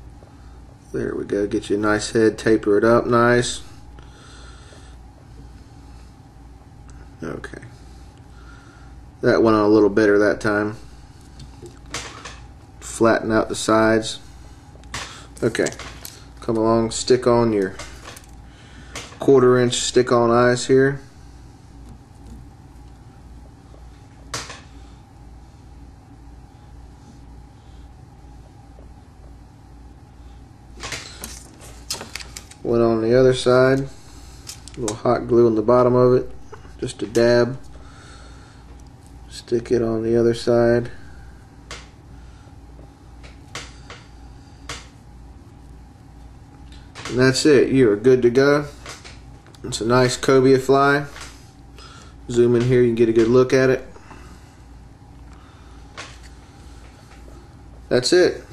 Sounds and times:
Speech: 0.9s - 3.7s, 7.2s - 7.8s, 9.2s - 10.8s, 12.8s - 14.2s, 15.4s - 15.8s, 16.4s - 17.8s, 19.2s - 21.1s, 32.6s - 33.9s, 34.8s - 37.6s, 39.3s - 41.0s, 47.1s - 48.8s, 49.6s - 51.1s, 52.3s - 53.9s, 57.9s - 58.5s.

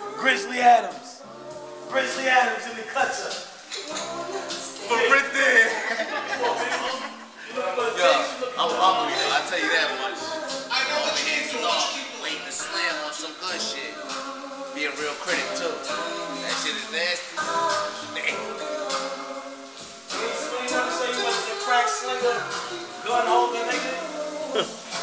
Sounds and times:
Music: 0.0s - 25.0s
Speech: 0.1s - 1.2s, 4.8s - 14.0s.

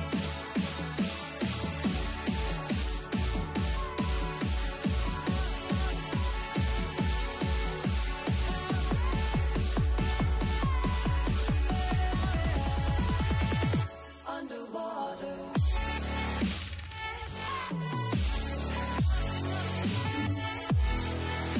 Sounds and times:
Music: 0.0s - 21.5s.

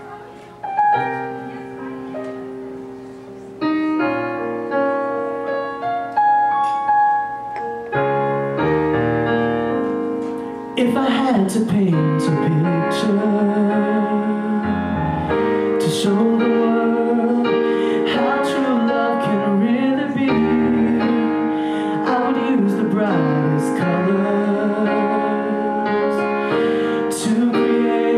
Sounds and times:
Music: 0.0s - 28.1s
Male singing: 10.8s - 15.0s, 15.8s - 26.3s, 27.0s - 28.1s.

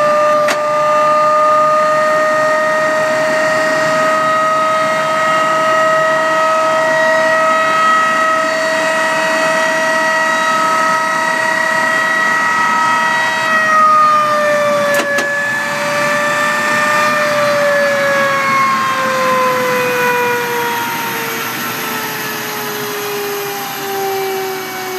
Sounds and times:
Jet engine: 0.0s - 24.9s.

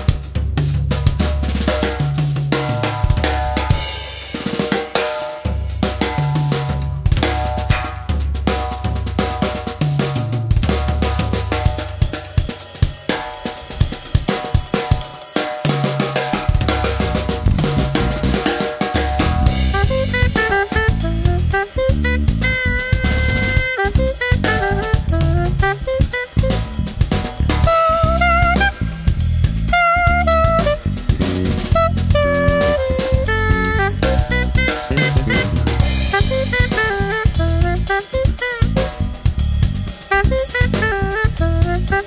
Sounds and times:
Drum: 0.0s - 42.0s
Drum kit: 0.0s - 42.0s
Jazz: 0.0s - 42.0s.

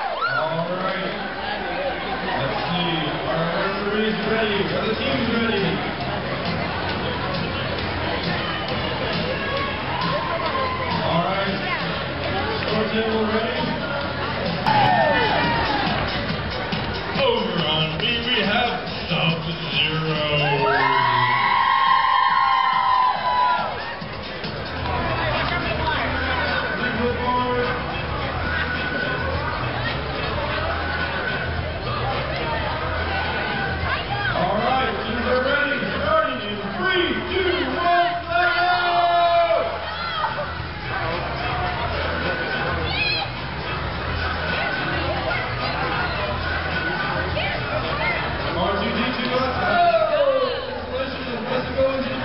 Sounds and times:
Music: 1.4s - 52.2s.

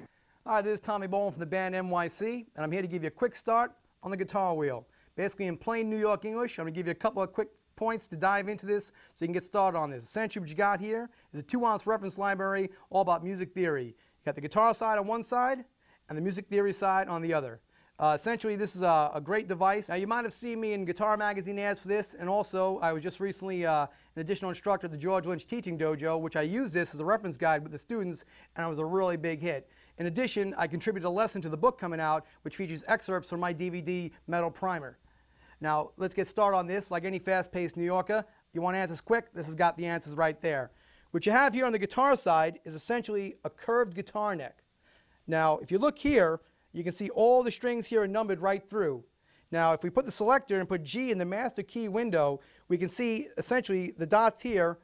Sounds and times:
Speech: 0.0s - 35.0s, 35.6s - 44.6s, 45.3s - 54.8s.

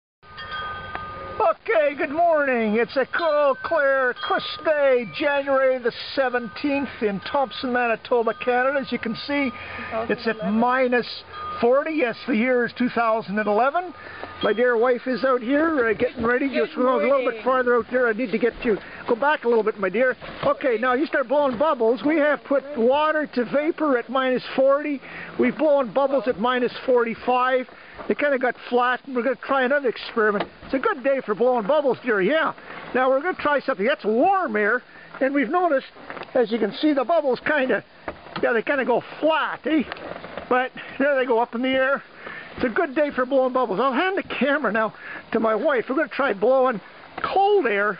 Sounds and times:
Speech: 1.4s - 42.0s, 42.6s - 47.9s.

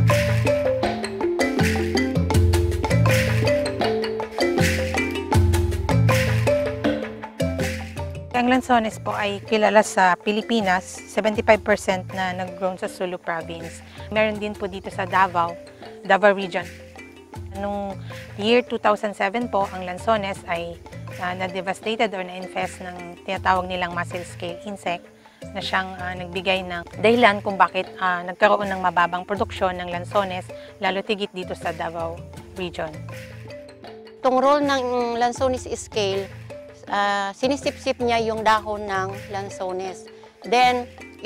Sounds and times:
Music: 0.0s - 41.2s
Speech: 8.4s - 16.7s, 17.6s - 25.0s, 25.6s - 33.0s, 34.3s - 36.3s, 36.9s - 41.2s.

